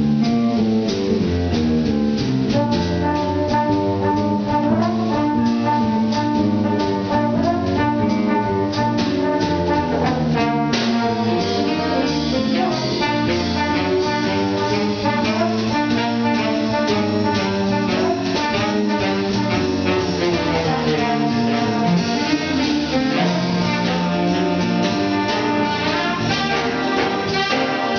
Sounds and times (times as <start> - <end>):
Jazz: 0.0 - 27.9
Orchestra: 0.0 - 27.9
String section: 2.2 - 27.9.